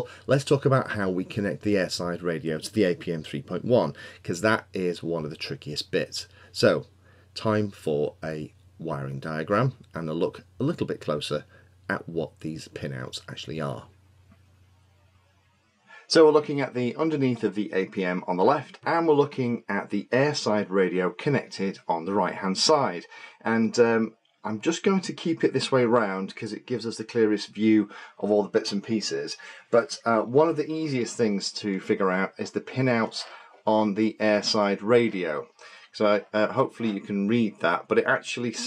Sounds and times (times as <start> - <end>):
Narration, monologue: 0.0 - 38.6.